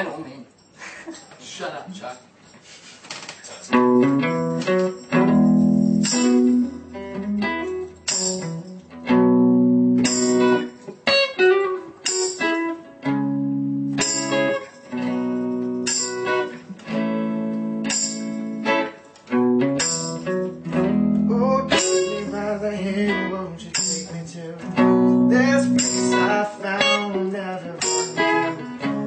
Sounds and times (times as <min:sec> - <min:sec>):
Strum: 0:03.7 - 0:29.0.